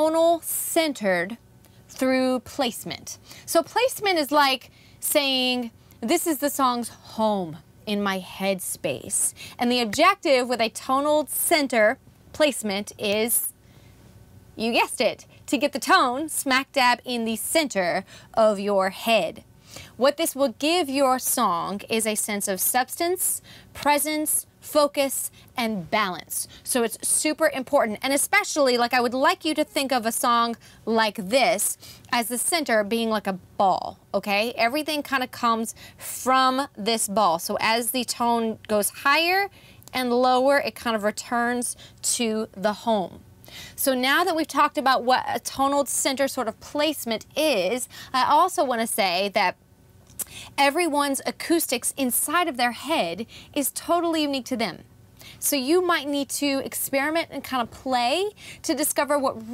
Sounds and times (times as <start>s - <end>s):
Speech: 0.0s - 13.5s, 14.6s - 19.4s, 20.0s - 43.2s, 43.8s - 49.6s, 50.6s - 54.8s, 55.4s - 59.5s.